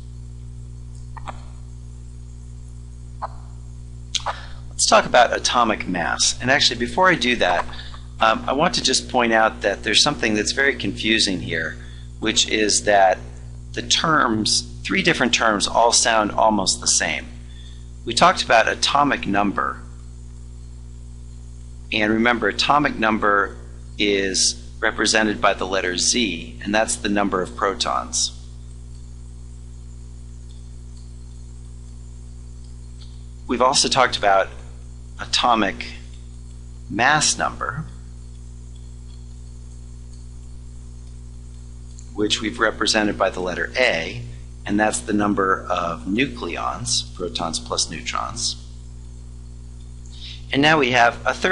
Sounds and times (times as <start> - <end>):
Speech: 4.2 - 17.4, 18.0 - 19.9, 21.9 - 28.4, 33.5 - 34.6, 35.2 - 36.1, 36.9 - 38.0, 42.2 - 48.6, 50.2 - 51.5.